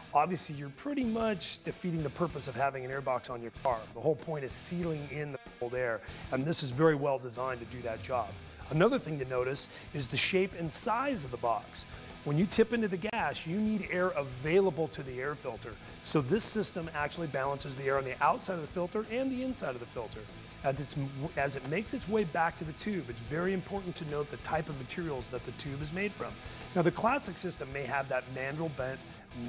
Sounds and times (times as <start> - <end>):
Music: 0.0 - 29.4
Speech: 0.1 - 29.4.